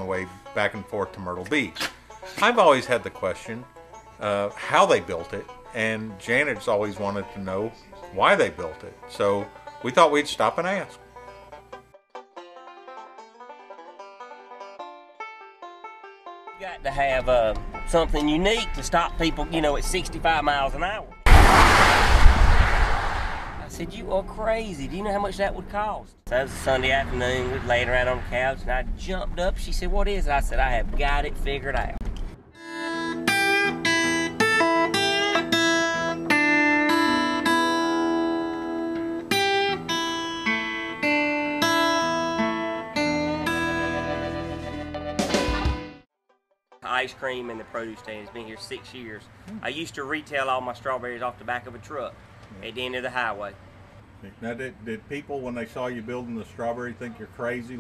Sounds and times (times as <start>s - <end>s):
Speech: 0.0s - 1.8s, 2.4s - 3.6s, 4.2s - 11.0s, 16.6s - 21.1s, 23.7s - 32.0s, 46.8s - 53.6s, 54.2s - 57.8s
Music: 0.0s - 21.3s, 32.6s - 49.8s
Outside, rural or natural: 21.1s - 29.2s.